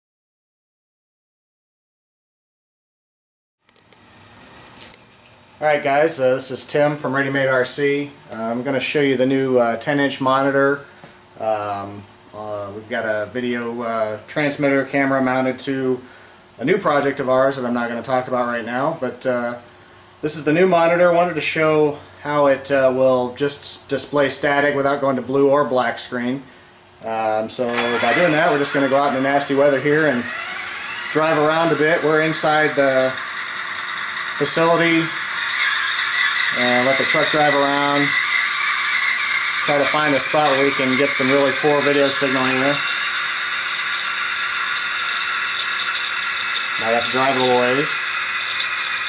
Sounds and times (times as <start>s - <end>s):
Speech: 5.6s - 10.8s, 11.4s - 30.3s, 31.1s - 33.2s, 34.4s - 35.2s, 36.5s - 38.2s, 39.6s - 42.9s, 46.8s - 48.0s.